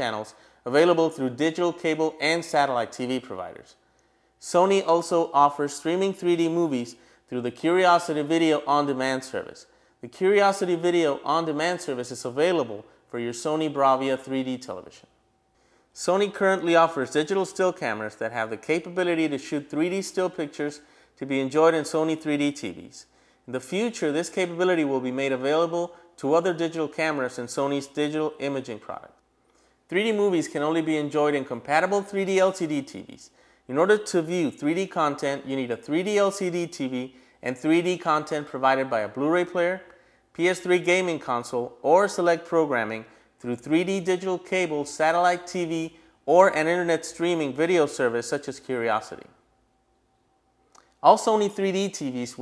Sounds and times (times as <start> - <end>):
Speech: 0.0 - 3.8, 4.4 - 15.1, 16.0 - 29.2, 29.9 - 49.4, 51.0 - 52.4.